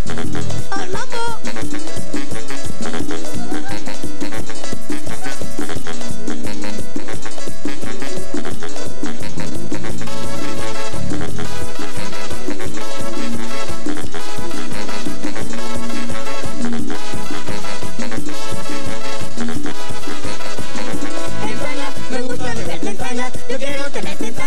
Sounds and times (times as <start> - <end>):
Happy music: 0.0 - 24.4.